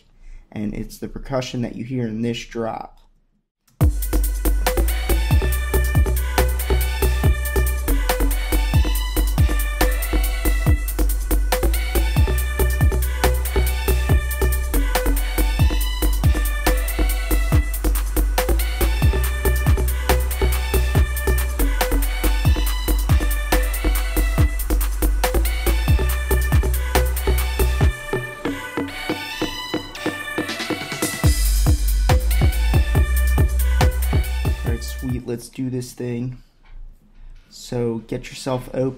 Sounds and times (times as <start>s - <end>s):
Drum kit: 3.8s - 35.3s.